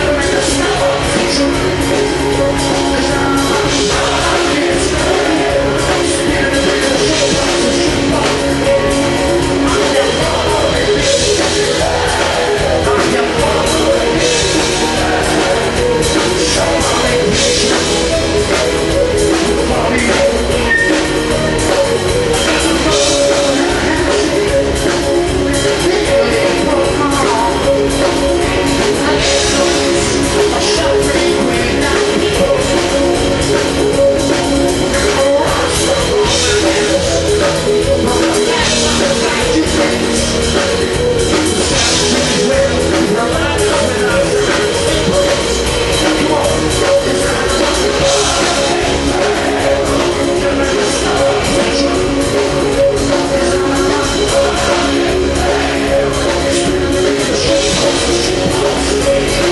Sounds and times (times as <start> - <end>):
Music: 0.0 - 59.5.